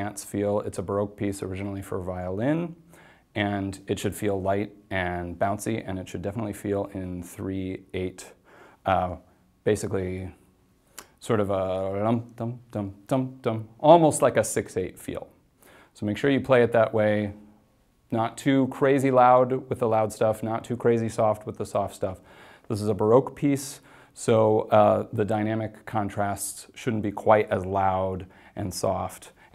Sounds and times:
Speech: 0.0s - 10.5s, 11.2s - 15.4s, 16.0s - 17.5s, 18.1s - 29.5s.

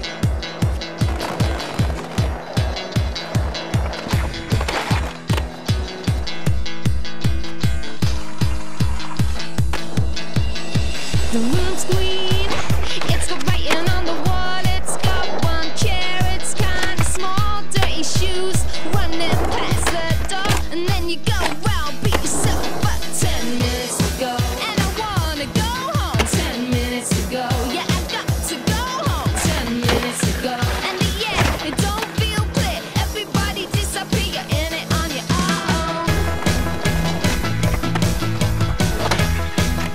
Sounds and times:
Skateboard: 0.0s - 6.2s, 8.0s - 39.9s
Music: 0.0s - 39.9s.

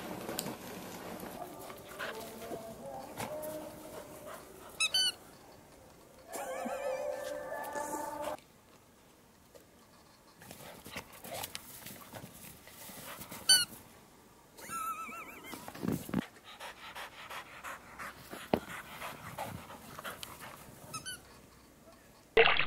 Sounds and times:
Squeak: 4.8s - 5.2s, 20.9s - 21.4s.

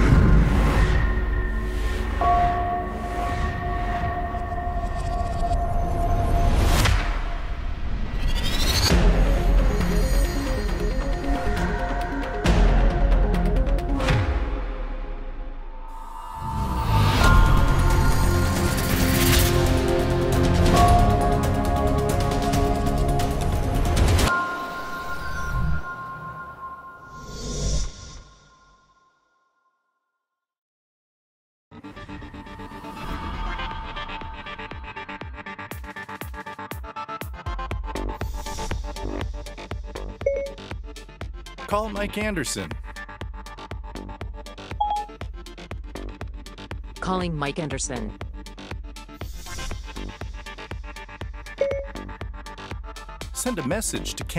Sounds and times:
Music: 0.0s - 30.4s, 31.7s - 54.3s.

